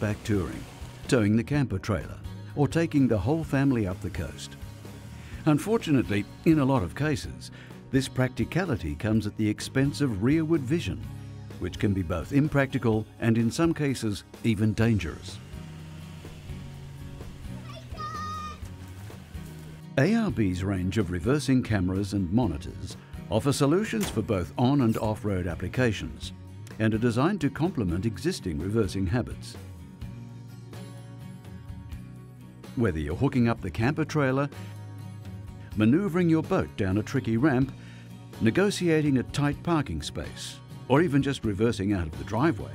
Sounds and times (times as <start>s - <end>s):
Speech: 0.0s - 4.5s, 5.4s - 11.0s, 11.6s - 15.4s, 20.0s - 29.6s, 32.8s - 34.5s, 35.8s - 37.7s, 38.4s - 42.7s
Music: 0.0s - 42.7s.